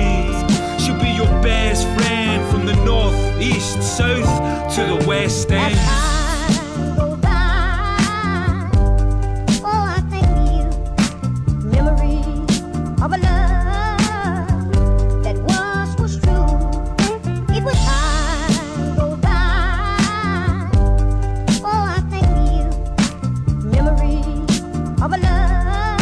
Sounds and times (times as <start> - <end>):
Rapping: 0.0 - 7.2, 25.0 - 25.5
Hip hop music: 0.0 - 7.4.